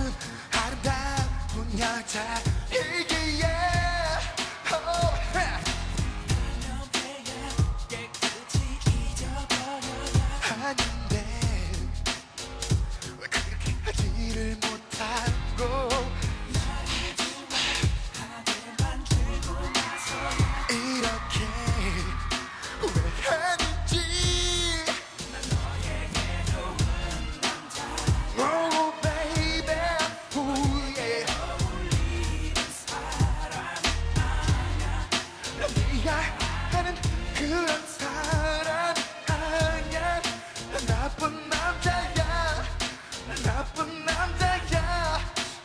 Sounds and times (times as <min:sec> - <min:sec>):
Music: 0:00.0 - 0:45.6.